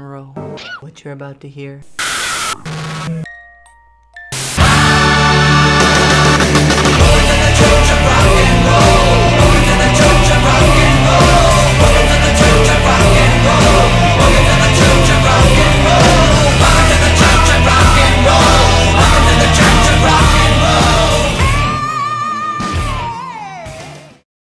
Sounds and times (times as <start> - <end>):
Rock and roll: 4.4 - 24.2.